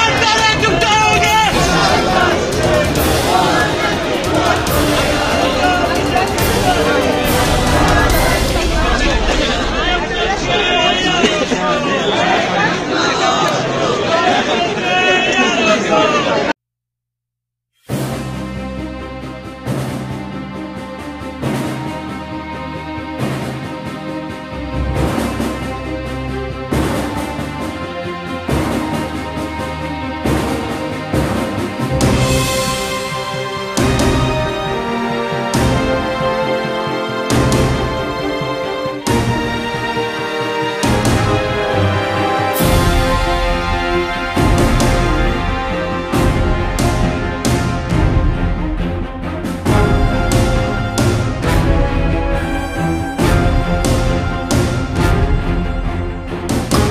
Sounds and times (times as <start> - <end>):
Theme music: 0.0 - 16.4, 17.9 - 56.9.